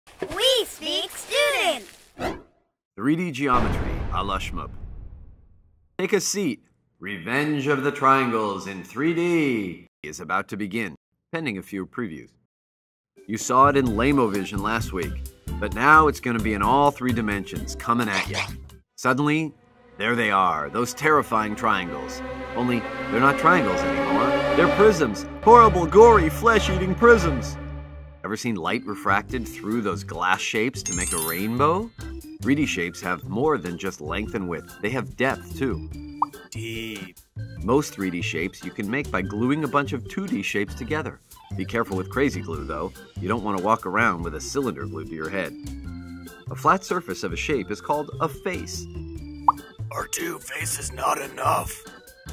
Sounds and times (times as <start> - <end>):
Speech synthesizer: 0.2 - 1.9, 6.0 - 12.3, 13.3 - 23.8, 28.3 - 31.9, 32.5 - 35.8, 36.5 - 37.1, 37.7 - 45.5, 49.9 - 51.9.